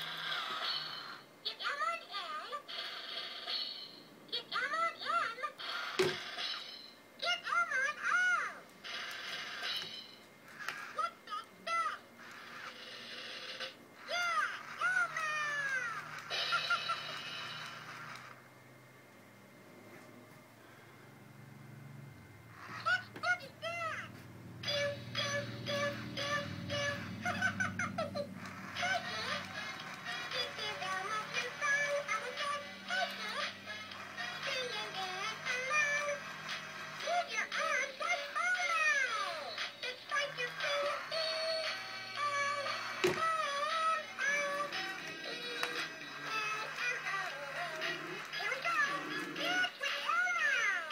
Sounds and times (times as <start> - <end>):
Inside, small room: 0.0 - 50.9
Speech: 1.5 - 2.6, 4.3 - 5.6, 7.2 - 8.6, 11.0 - 12.0, 14.1 - 16.0, 22.9 - 24.1, 48.4 - 50.9.